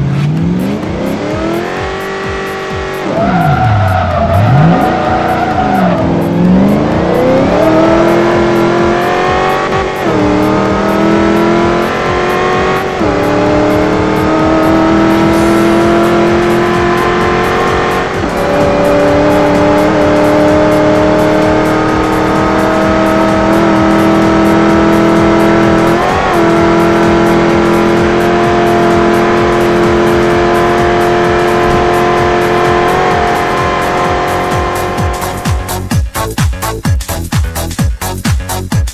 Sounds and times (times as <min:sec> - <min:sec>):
Accelerating, revving, vroom: 0:00.0 - 0:35.8
Music: 0:00.0 - 0:38.9
Vehicle: 0:00.0 - 0:38.9.